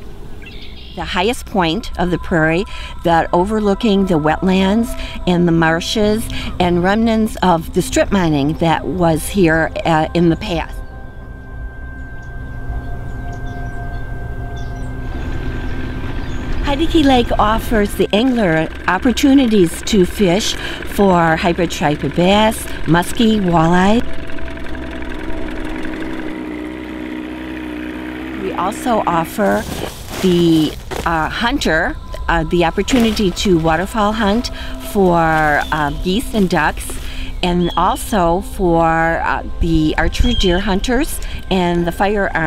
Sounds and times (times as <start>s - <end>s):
Speech: 1.0s - 10.8s, 16.6s - 24.0s, 28.4s - 42.4s.